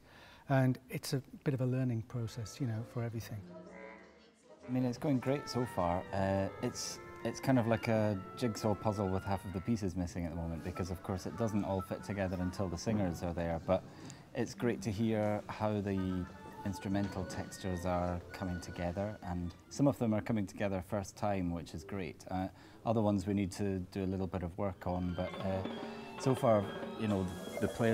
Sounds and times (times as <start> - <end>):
Speech: 0.5 - 27.9
Music: 1.8 - 27.9.